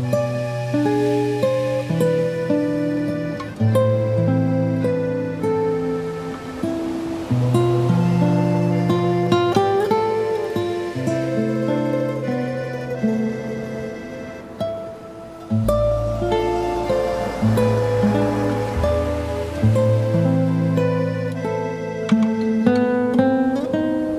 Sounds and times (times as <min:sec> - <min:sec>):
Music: 0:00.0 - 0:24.1.